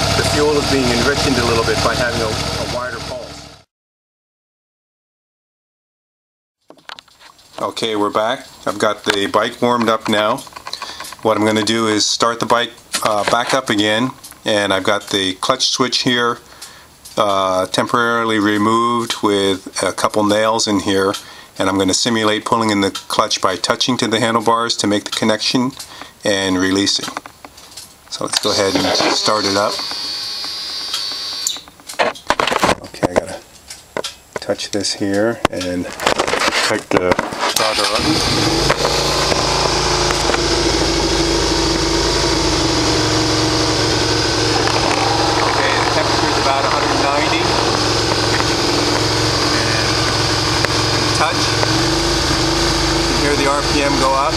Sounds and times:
Speech: 0:00.1 - 0:03.4, 0:07.6 - 0:10.5, 0:11.2 - 0:16.4, 0:17.2 - 0:27.2, 0:28.1 - 0:29.8, 0:32.8 - 0:33.4, 0:34.4 - 0:36.0, 0:36.6 - 0:38.2, 0:45.4 - 0:47.6, 0:51.1 - 0:51.6, 0:53.1 - 0:54.3
Electric shaver, electric razor: 0:28.5 - 0:31.5, 0:38.3 - 0:54.3.

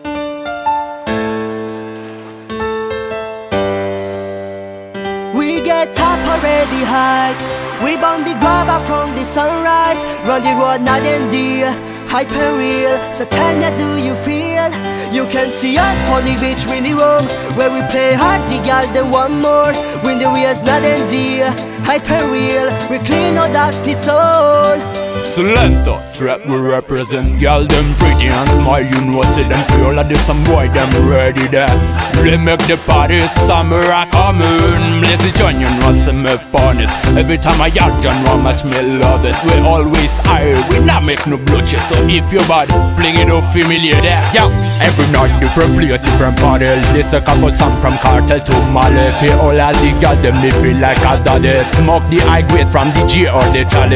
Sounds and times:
Music: 0:00.0 - 0:53.9.

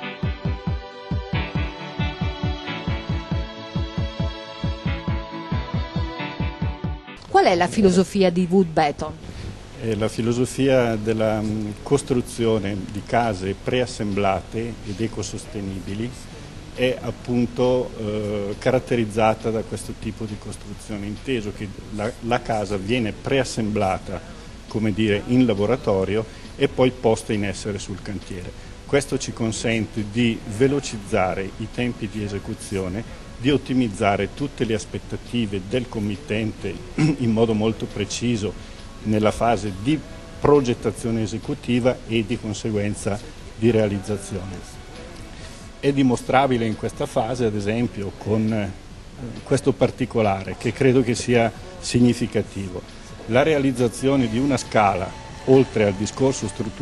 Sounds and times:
Speech: 0:07.3 - 0:09.2, 0:09.8 - 0:16.2, 0:16.8 - 0:44.8, 0:45.8 - 0:56.8.

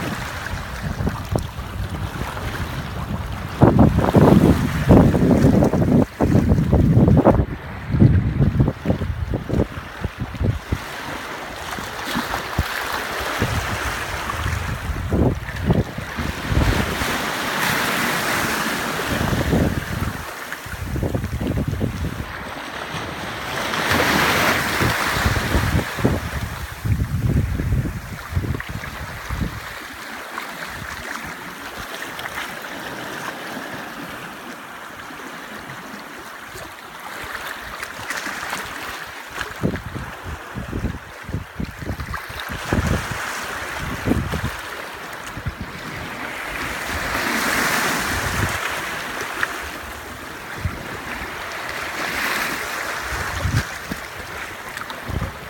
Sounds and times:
Stream: 0:00.0 - 0:55.5.

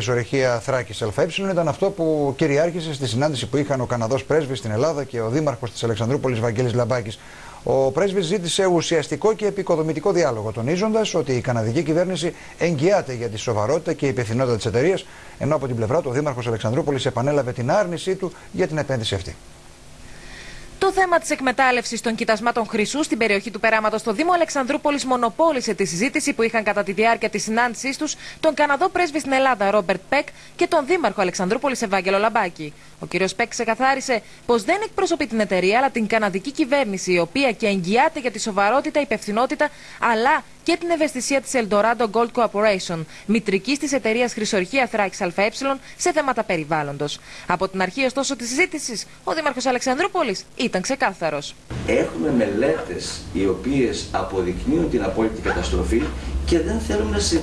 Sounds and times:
Speech: 0:00.0 - 0:19.4, 0:20.8 - 0:57.4.

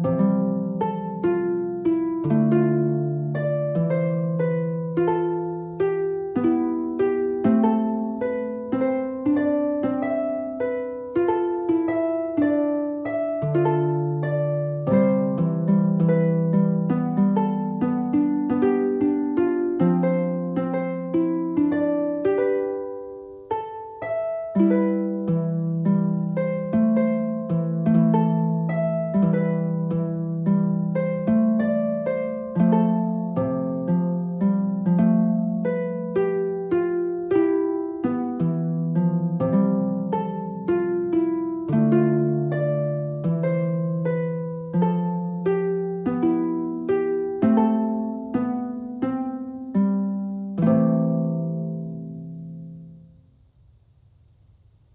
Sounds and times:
Pizzicato: 0:00.0 - 0:53.2
Harp: 0:00.0 - 0:53.8.

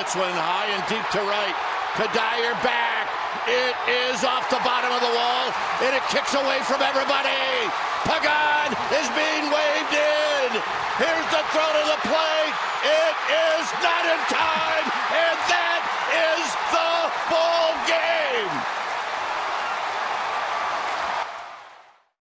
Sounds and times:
Speech: 0:00.0 - 0:18.6.

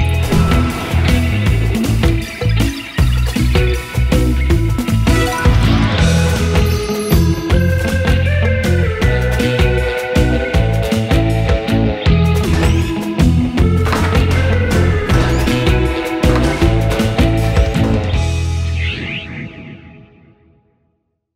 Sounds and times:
Music: 0:00.0 - 0:21.3.

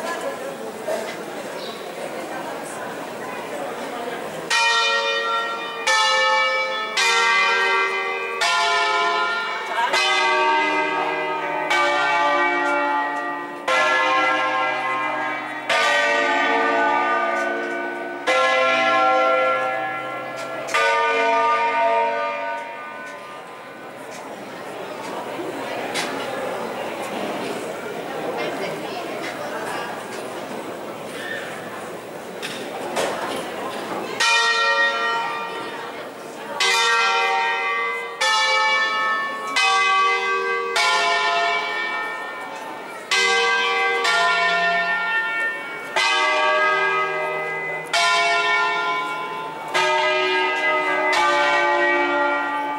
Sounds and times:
Church bell: 0:00.0 - 0:52.7.

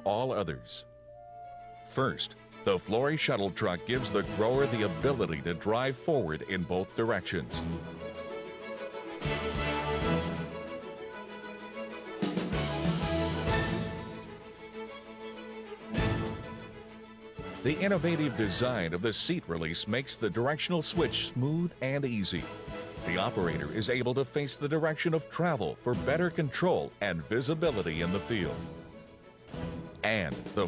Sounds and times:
Speech: 0:00.0 - 0:00.9, 0:02.0 - 0:07.6, 0:17.6 - 0:28.6, 0:30.1 - 0:30.6
Music: 0:00.0 - 0:30.6.

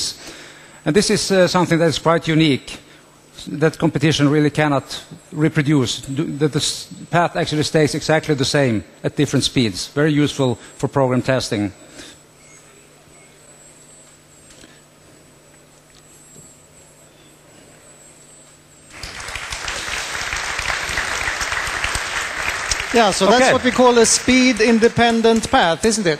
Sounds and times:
Speech: 0:00.9 - 0:02.8, 0:03.4 - 0:11.8, 0:23.0 - 0:26.1.

